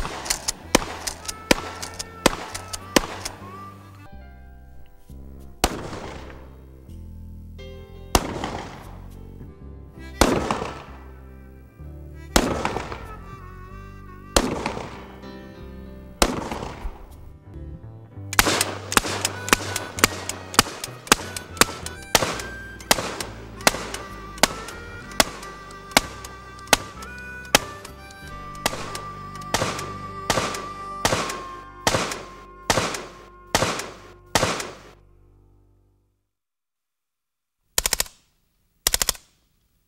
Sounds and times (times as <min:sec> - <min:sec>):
Music: 0:00.0 - 0:36.2.